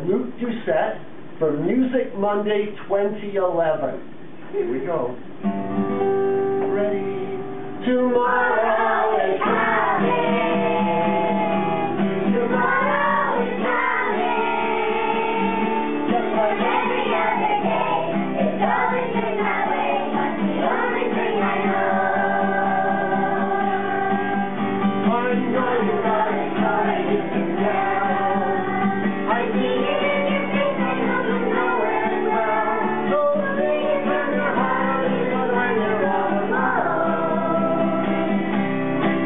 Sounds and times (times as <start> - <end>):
Music: 5.4 - 39.2.